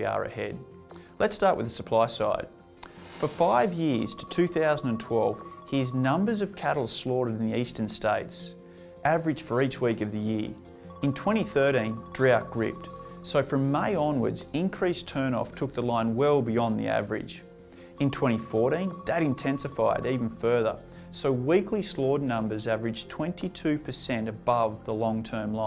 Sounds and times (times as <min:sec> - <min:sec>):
Speech: 0:00.0 - 0:02.5, 0:03.2 - 0:25.6
Music: 0:00.0 - 0:25.6.